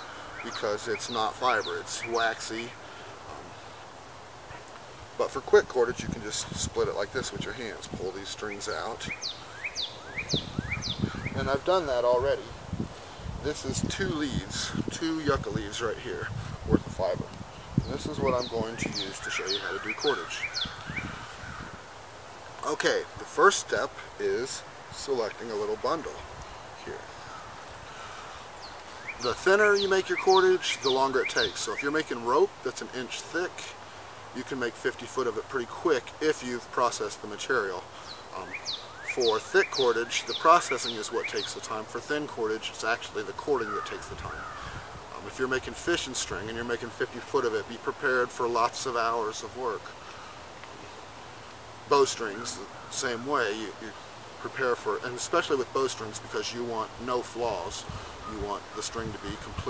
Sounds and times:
Bird: 0.0s - 3.8s, 6.0s - 12.5s, 17.8s - 21.8s, 24.4s - 33.8s, 36.6s - 51.0s, 52.0s - 56.6s
Speech: 0.4s - 3.5s, 5.2s - 9.2s, 11.4s - 12.6s, 13.4s - 17.3s, 17.9s - 20.4s, 22.6s - 26.2s, 26.8s - 27.0s, 29.2s - 33.8s, 34.4s - 44.4s, 45.1s - 49.9s, 51.9s - 59.6s.

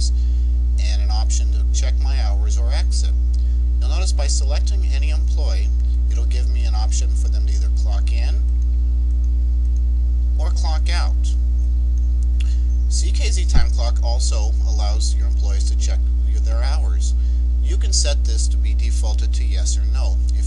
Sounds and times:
Speech: 0.8s - 3.2s, 3.8s - 8.5s, 10.4s - 11.4s, 12.9s - 20.4s.

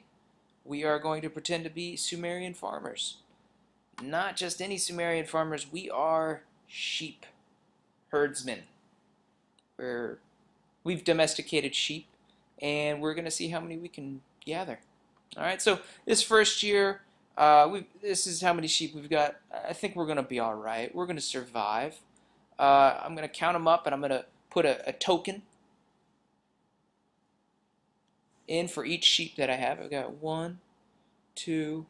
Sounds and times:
Speech: 0.7s - 3.3s, 4.0s - 7.4s, 8.1s - 8.8s, 9.8s - 10.2s, 10.8s - 25.5s, 28.5s - 30.7s, 31.4s - 31.9s.

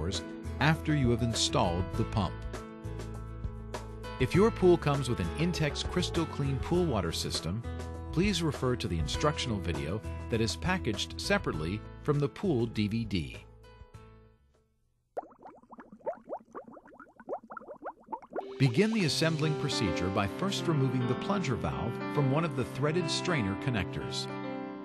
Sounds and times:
Speech: 0.0s - 2.4s, 4.2s - 13.5s, 18.6s - 24.3s
Music: 0.0s - 14.7s, 18.4s - 24.8s.

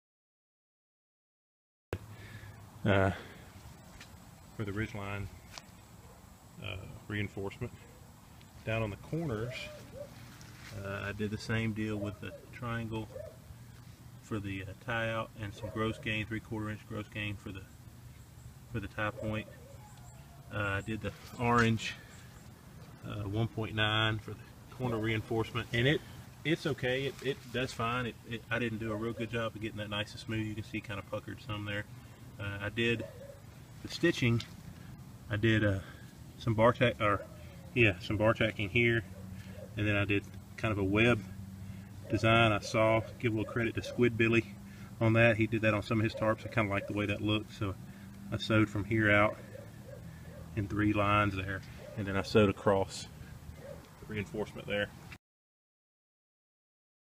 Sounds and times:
Outside, rural or natural: 2.0s - 55.2s
Speech: 2.8s - 3.3s, 4.6s - 5.4s, 6.6s - 7.8s, 8.6s - 9.8s, 10.7s - 13.2s, 14.2s - 17.7s, 18.7s - 19.5s, 20.5s - 22.0s, 23.0s - 33.1s, 33.8s - 34.5s, 35.3s - 37.2s, 37.8s - 39.1s, 39.8s - 41.4s, 42.1s - 49.4s, 50.6s - 53.1s, 54.1s - 55.0s.

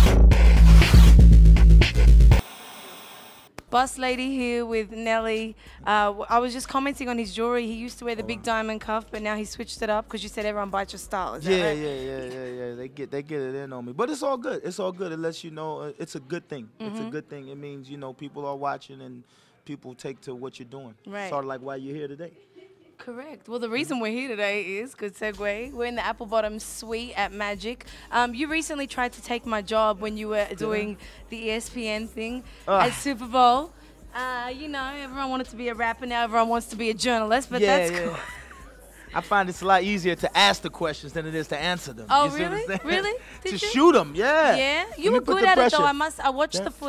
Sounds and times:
Music: 0.0s - 2.4s, 3.7s - 14.9s, 23.6s - 46.8s
Speech: 16.2s - 21.3s, 29.6s - 33.4s, 37.5s - 38.2s, 39.2s - 46.8s.

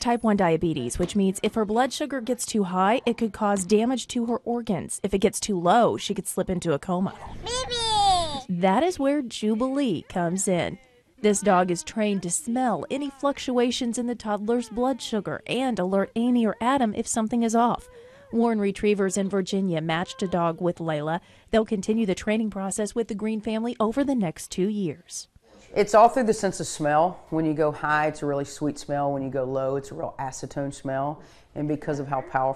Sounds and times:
Speech: 8.4s - 32.5s.

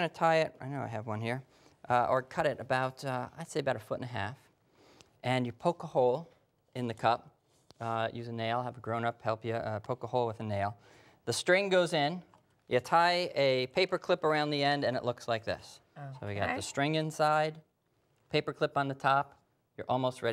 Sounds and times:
Speech: 0.0s - 4.5s, 5.2s - 17.6s, 18.3s - 20.3s.

